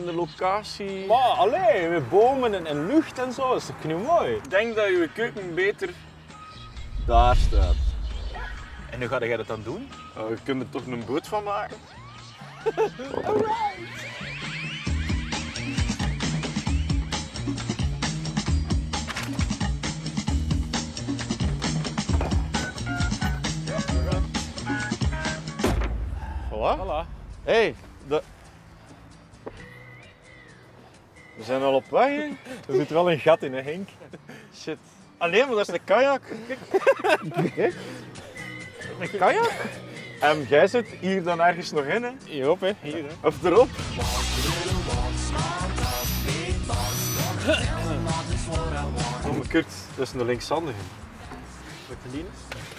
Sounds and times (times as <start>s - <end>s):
Music: 0.0s - 52.7s.